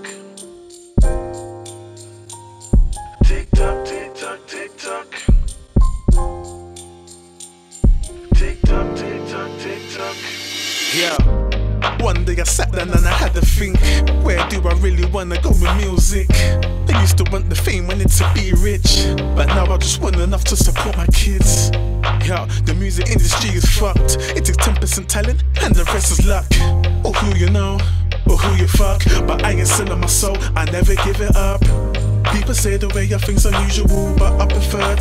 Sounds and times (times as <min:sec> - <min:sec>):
Music: 0:00.0 - 0:35.0.